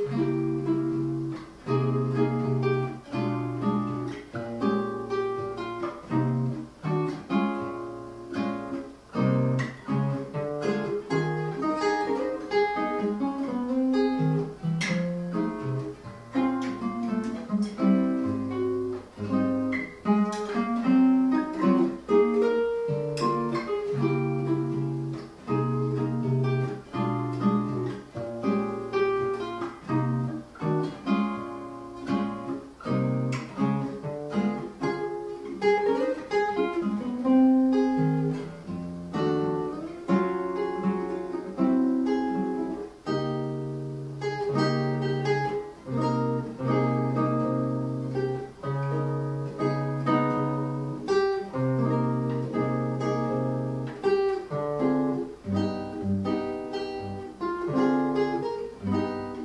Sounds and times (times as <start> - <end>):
Acoustic guitar: 0.0 - 59.4.